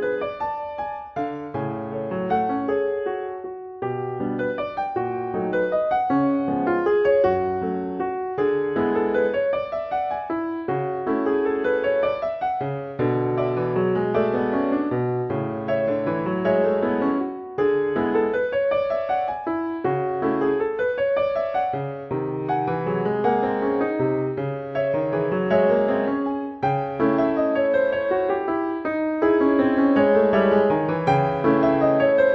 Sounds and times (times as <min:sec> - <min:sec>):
Piano: 0:00.0 - 0:32.3.